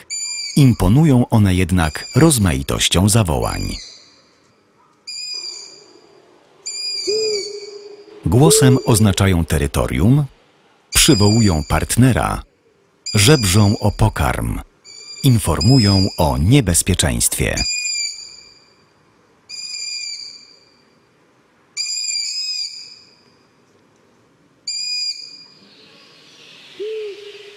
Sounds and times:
Owl: 0.0s - 2.8s, 3.4s - 9.6s, 10.9s - 18.8s, 19.5s - 20.8s, 21.8s - 23.3s, 24.7s - 27.5s.

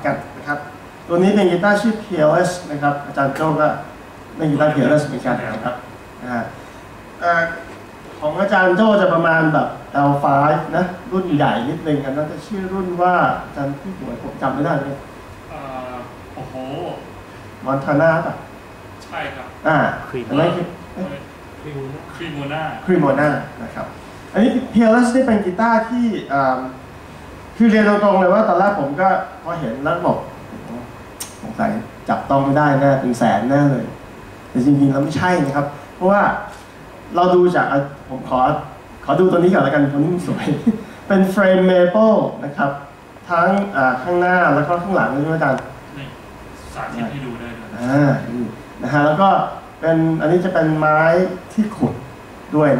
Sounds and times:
Speech: 0.0s - 6.6s, 7.2s - 26.8s, 27.6s - 34.0s, 34.6s - 52.7s.

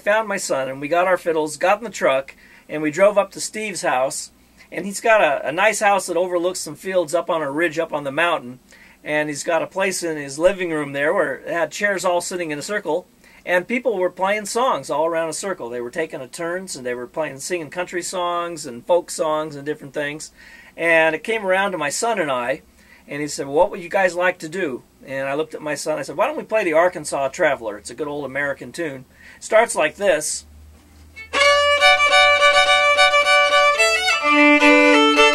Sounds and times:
Speech: 0.0s - 30.5s.

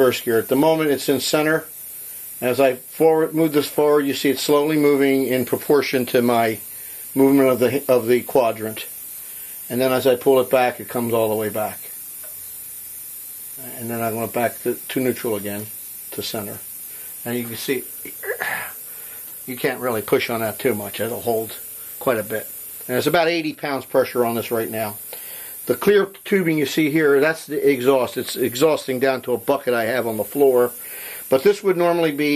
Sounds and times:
Speech: 0.0s - 1.7s, 2.4s - 6.6s, 7.2s - 9.0s, 9.7s - 11.9s, 13.6s - 18.6s, 19.5s - 25.0s, 25.7s - 32.3s.

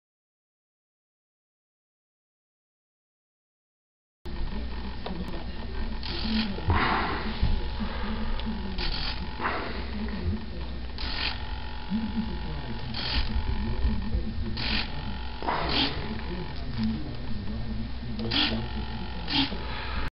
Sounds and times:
Speech: 4.3s - 11.0s, 11.8s - 20.1s.

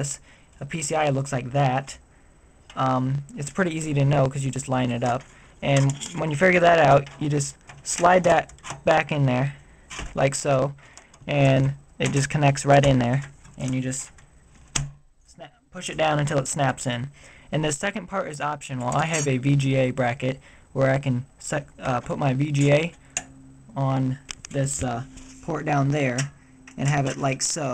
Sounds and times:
Speech: 0.0s - 2.0s, 2.8s - 9.6s, 10.2s - 14.2s, 15.3s - 23.0s, 23.7s - 27.7s.

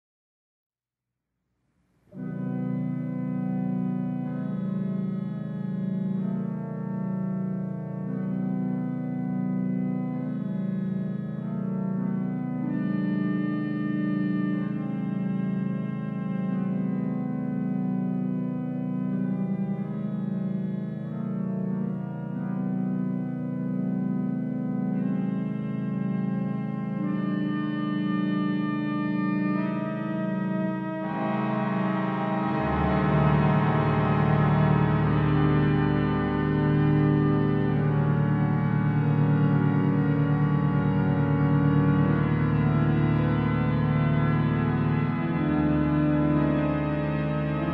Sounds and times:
Organ: 2.1s - 47.7s.

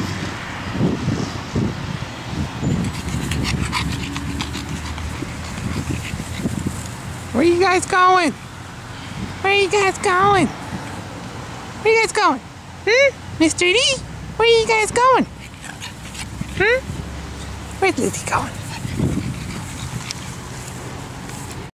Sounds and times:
Speech: 7.3s - 8.4s, 9.4s - 10.5s, 11.8s - 15.3s, 16.6s - 16.9s, 17.8s - 18.6s.

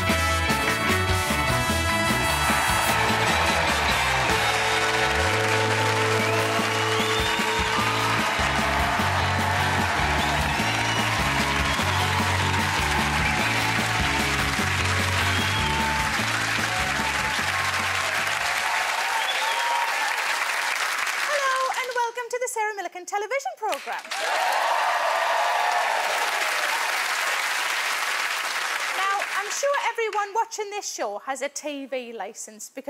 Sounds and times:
Music: 0.0s - 18.7s
Speech: 21.3s - 24.0s, 29.0s - 32.9s.

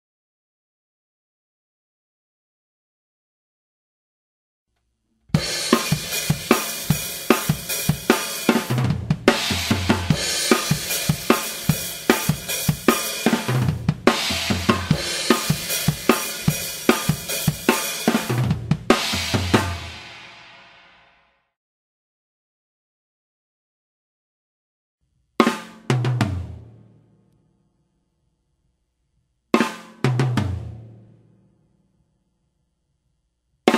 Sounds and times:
Drum kit: 5.3s - 21.2s, 25.4s - 26.9s, 29.6s - 31.1s
Snare drum: 5.4s - 20.7s, 25.4s - 26.6s, 29.6s - 30.8s.

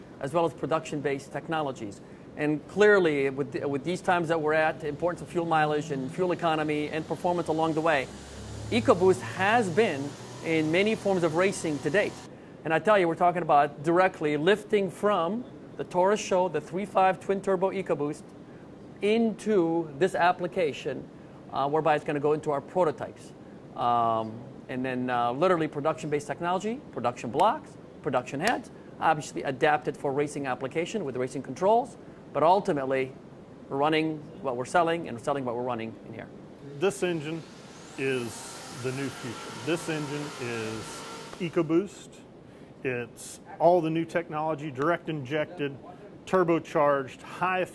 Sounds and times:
Speech: 0.2s - 8.1s, 8.8s - 18.2s, 19.0s - 47.7s.

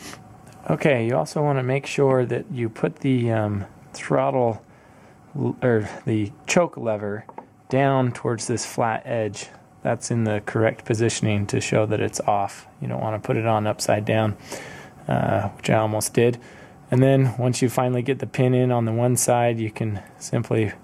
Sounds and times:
Speech: 0.6s - 4.6s, 5.4s - 14.4s, 15.0s - 20.8s.

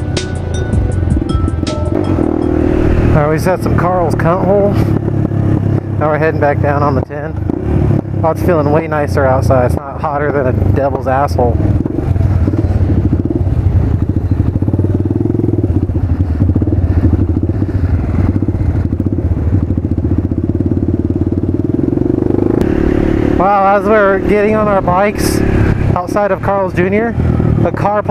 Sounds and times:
Motorcycle: 0.0s - 28.1s
Speech: 3.2s - 4.9s, 6.0s - 7.4s, 8.2s - 11.6s, 23.4s - 25.4s, 26.0s - 28.1s.

